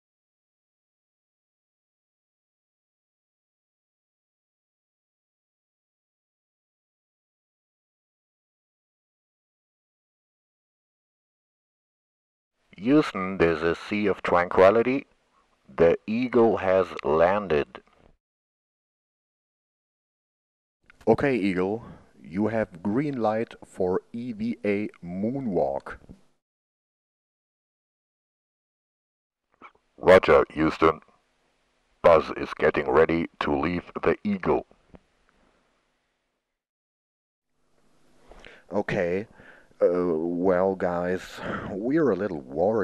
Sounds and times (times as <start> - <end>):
Speech: 12.8 - 15.1, 15.7 - 17.8, 21.0 - 26.2, 30.0 - 31.0, 32.1 - 34.7, 38.7 - 42.8.